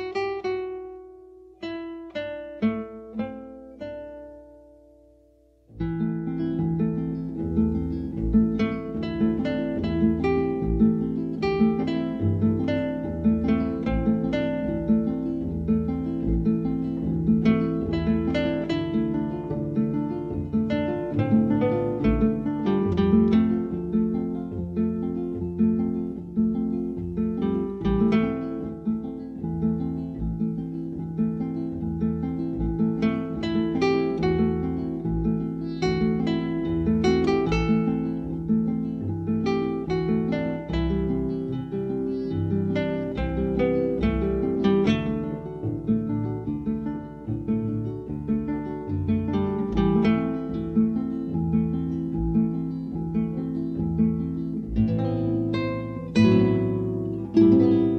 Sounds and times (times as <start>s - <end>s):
Harp: 5.7s - 57.9s.